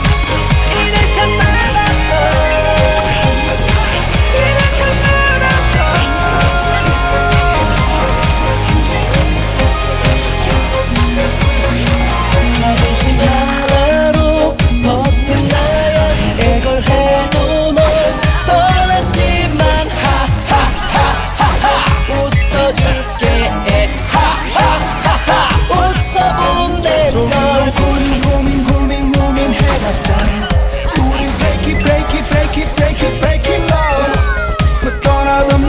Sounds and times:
Music of Asia: 0:00.0 - 0:35.6.

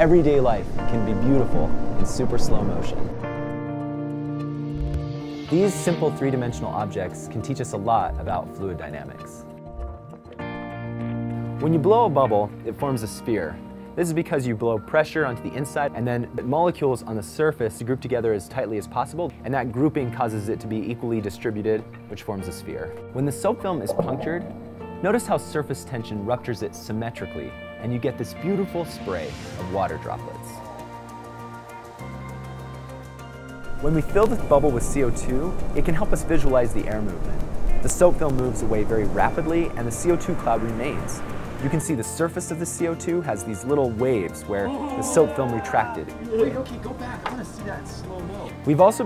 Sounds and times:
Speech: 0:00.0 - 0:03.0, 0:05.5 - 0:09.4, 0:11.6 - 0:24.4, 0:25.0 - 0:30.6, 0:33.8 - 0:37.2, 0:37.8 - 0:49.0
Music: 0:00.0 - 0:49.0.

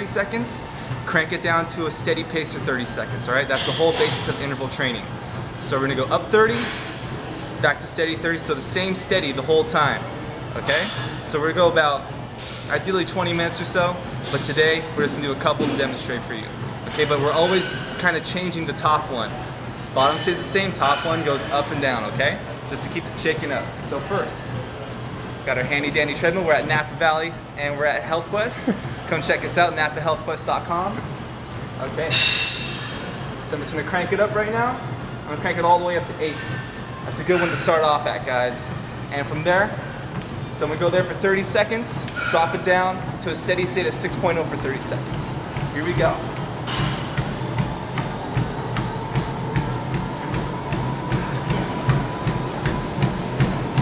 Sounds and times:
Inside, large room or hall: 0:00.0 - 0:26.6, 0:27.2 - 0:53.8
Speech: 0:10.6 - 0:12.0, 0:40.6 - 0:46.3.

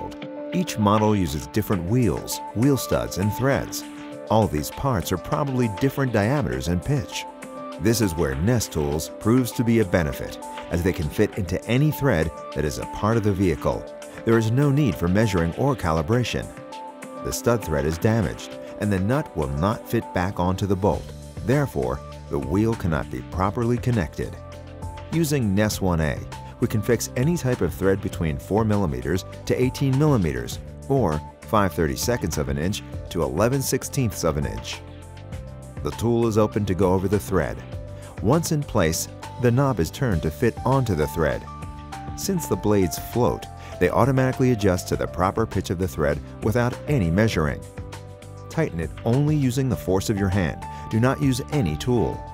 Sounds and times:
Speech: 0:00.0 - 0:16.5, 0:17.2 - 0:24.4, 0:25.1 - 0:34.8, 0:35.8 - 0:41.5, 0:42.2 - 0:47.6, 0:48.5 - 0:52.2
Music: 0:00.0 - 0:52.3.

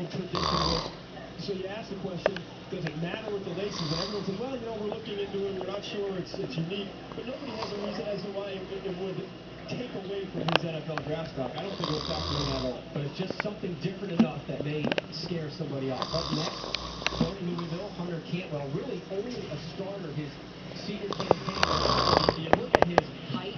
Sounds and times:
Speech: 0:00.0 - 0:23.5
Snoring: 0:00.3 - 0:01.0, 0:03.5 - 0:04.5, 0:07.4 - 0:08.2, 0:11.6 - 0:12.8, 0:16.0 - 0:18.0, 0:21.1 - 0:22.5.

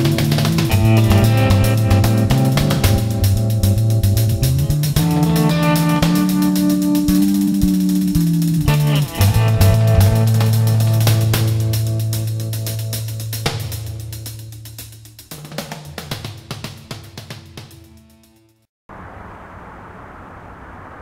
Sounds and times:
Music: 0:00.0 - 0:18.7.

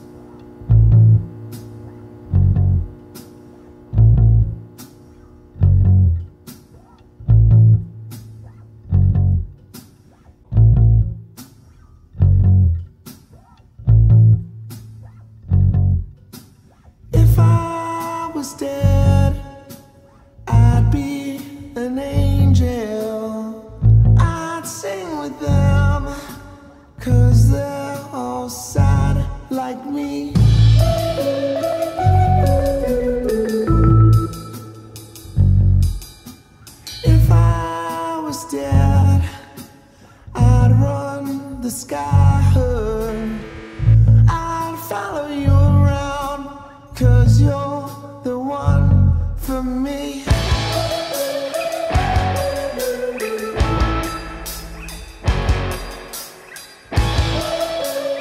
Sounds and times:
Music: 0:00.0 - 0:58.2.

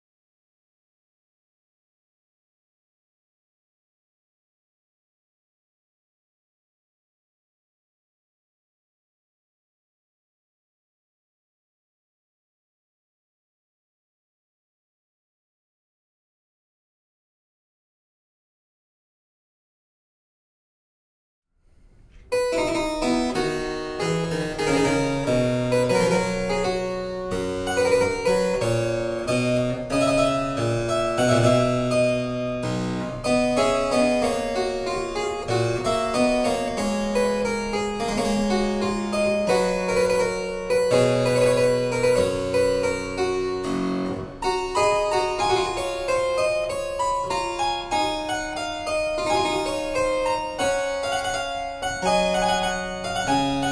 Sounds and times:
Harpsichord: 0:22.2 - 0:53.7.

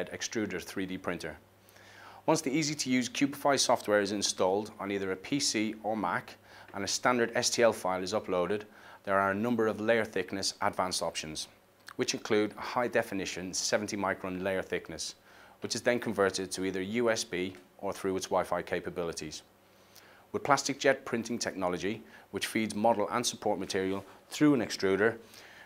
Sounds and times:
Speech: 0:00.0 - 0:01.4, 0:02.2 - 0:19.5, 0:20.3 - 0:25.2.

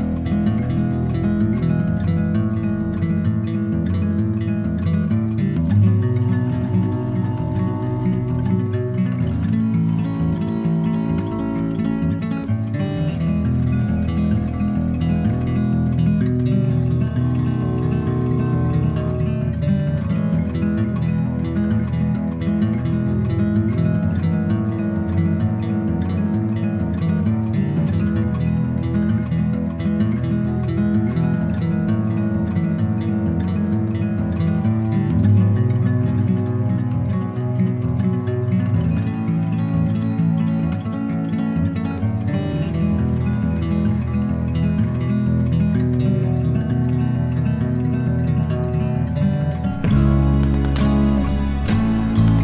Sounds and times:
Music: 0:00.0 - 0:52.4.

